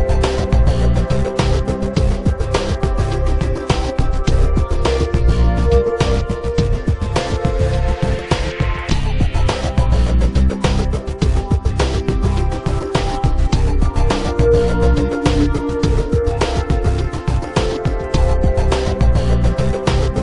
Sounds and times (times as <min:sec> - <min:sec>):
Music: 0:00.0 - 0:20.2.